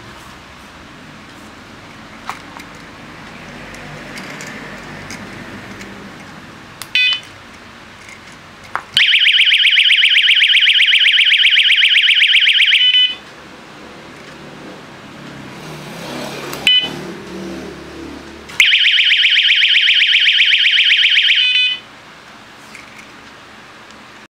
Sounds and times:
Vehicle: 0.0s - 24.3s.

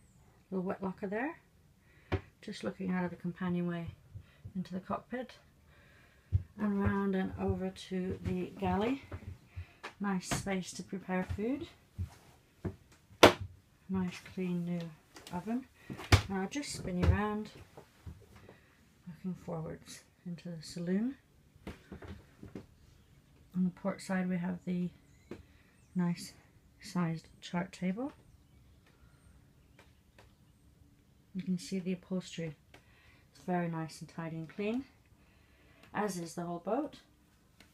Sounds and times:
Speech: 0.5s - 1.4s, 2.4s - 4.0s, 4.6s - 5.4s, 6.6s - 9.1s, 10.0s - 11.8s, 13.9s - 15.7s, 16.3s - 17.6s, 19.1s - 21.2s, 23.6s - 25.0s, 26.0s - 28.2s, 31.4s - 32.6s, 33.4s - 35.0s, 36.0s - 37.1s.

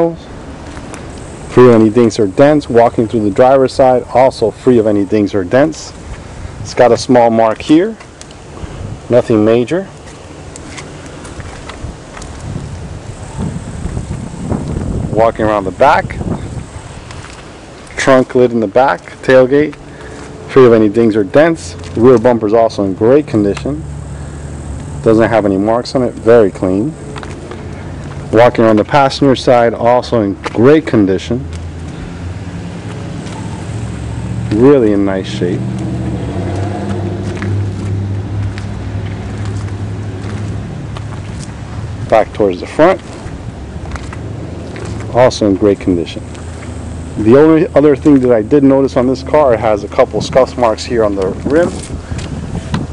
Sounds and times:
Speech: 0.0s - 0.3s, 1.5s - 6.0s, 6.6s - 8.0s, 9.1s - 10.0s, 15.1s - 16.2s, 18.0s - 19.8s, 20.5s - 23.8s, 25.0s - 27.0s, 28.3s - 31.5s, 34.5s - 35.6s, 42.1s - 43.1s, 45.1s - 46.3s, 47.2s - 51.8s
Wind: 0.0s - 52.9s.

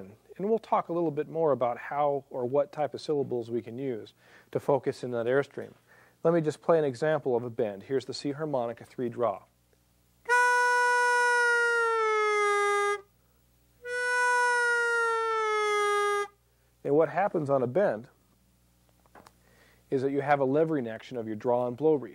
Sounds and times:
Harmonica: 10.3s - 13.1s, 13.8s - 16.4s.

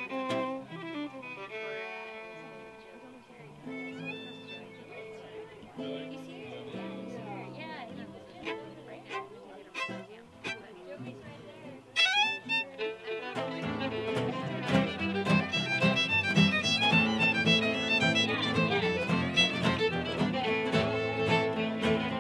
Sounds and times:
Music: 0.0s - 22.2s
Speech: 0.4s - 22.2s.

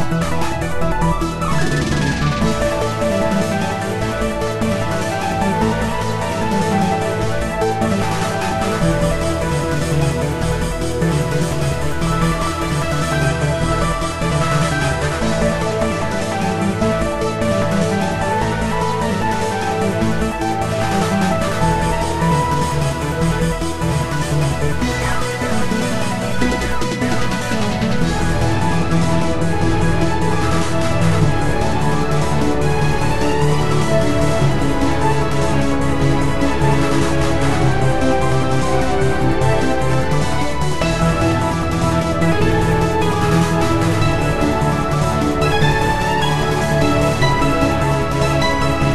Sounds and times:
Video game music: 0.0s - 48.9s.

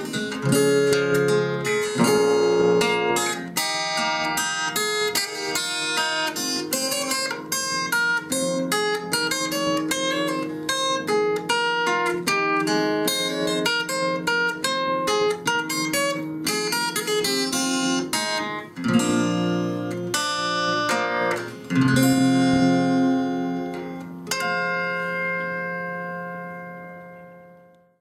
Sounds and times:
Acoustic guitar: 0.0s - 28.0s.

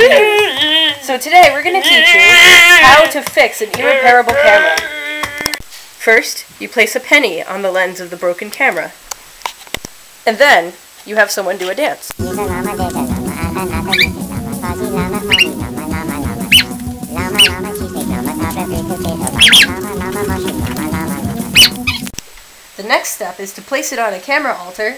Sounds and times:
Speech: 0.0s - 4.9s, 6.0s - 9.0s, 10.3s - 14.1s, 22.8s - 24.9s
Music: 12.2s - 22.2s.

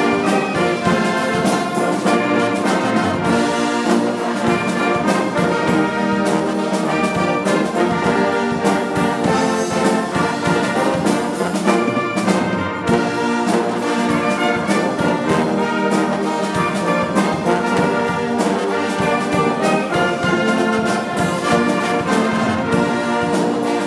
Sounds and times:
Trombone: 0.0s - 23.8s
Trumpet: 0.0s - 23.8s.

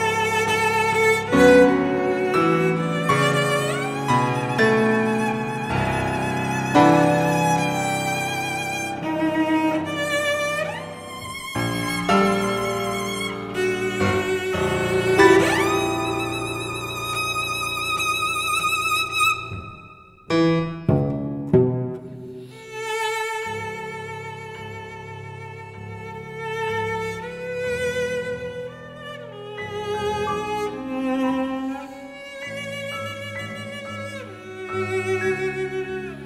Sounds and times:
Cello: 0.0s - 36.2s
Piano: 0.0s - 36.2s.

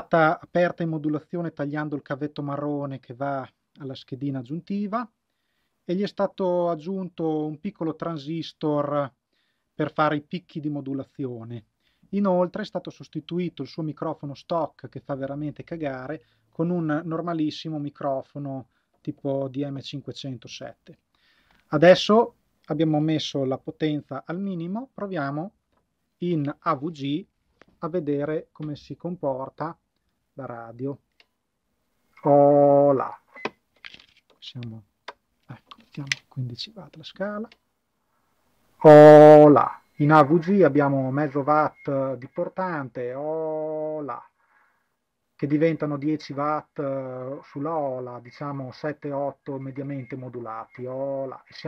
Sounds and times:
Speech: 0.0s - 5.1s, 5.9s - 9.2s, 9.8s - 21.0s, 21.7s - 25.6s, 26.2s - 29.8s, 30.4s - 31.0s, 32.2s - 33.2s, 34.4s - 34.9s, 35.5s - 37.6s, 38.8s - 44.3s, 45.4s - 51.6s.

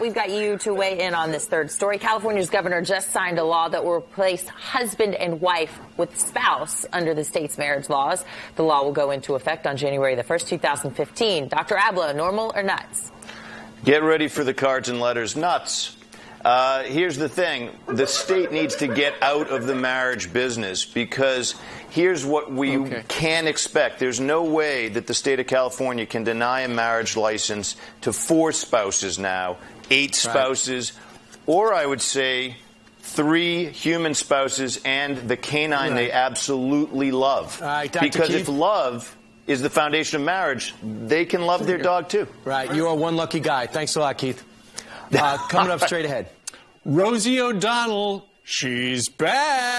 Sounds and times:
Speech: 33.2s - 38.7s.

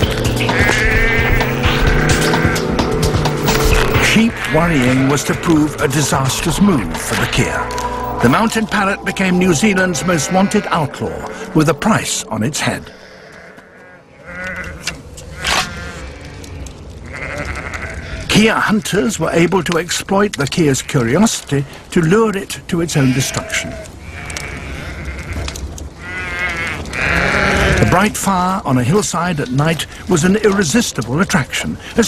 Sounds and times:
Bleat: 0.5s - 2.6s, 4.1s - 5.6s, 13.0s - 16.4s, 17.0s - 18.2s, 23.0s - 28.0s
Speech: 4.0s - 12.9s, 18.3s - 23.8s, 27.7s - 32.0s.

